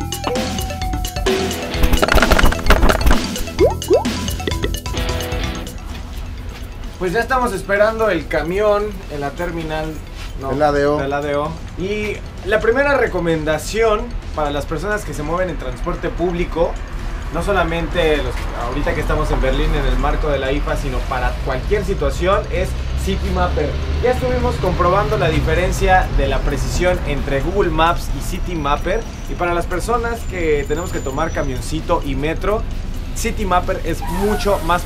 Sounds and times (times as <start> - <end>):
Music: 0.0 - 21.2, 28.5 - 34.8
Speech: 7.0 - 16.8, 17.4 - 32.6, 33.2 - 34.8.